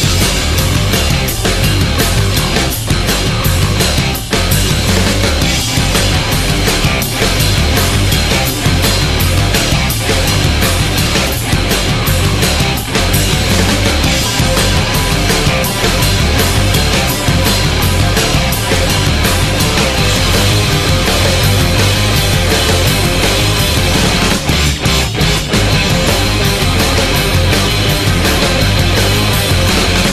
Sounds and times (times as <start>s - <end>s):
Rhythm and blues: 0.0s - 30.1s.